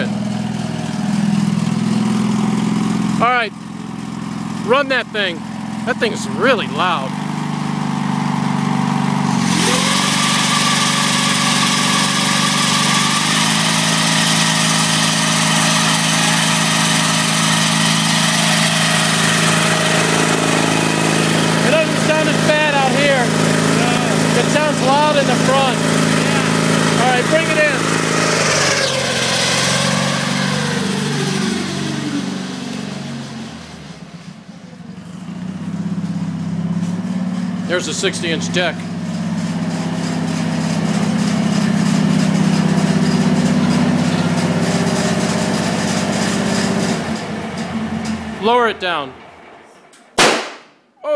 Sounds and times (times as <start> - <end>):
Lawn mower: 0.0 - 49.0.